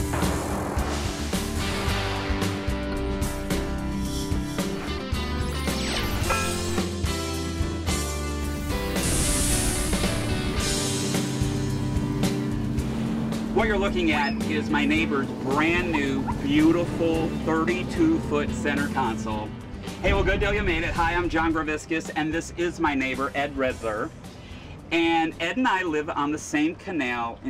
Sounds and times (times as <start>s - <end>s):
Motorboat, speedboat: 10.6s - 19.4s.